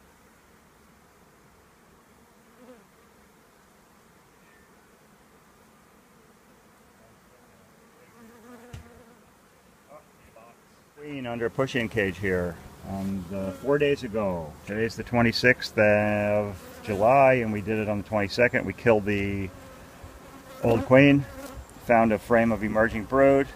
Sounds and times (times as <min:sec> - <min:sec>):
Bee, wasp, etc.: 0:00.0 - 0:23.5
Fly, housefly: 0:00.0 - 0:23.5.